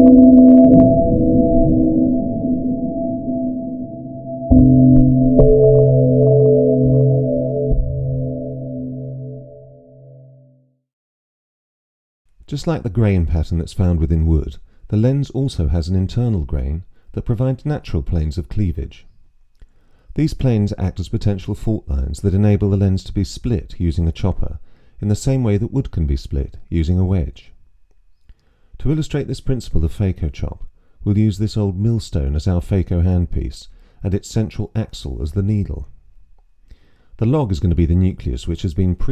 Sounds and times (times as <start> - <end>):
Speech: 12.5 - 19.1, 20.2 - 27.6, 28.8 - 36.0, 37.2 - 39.1.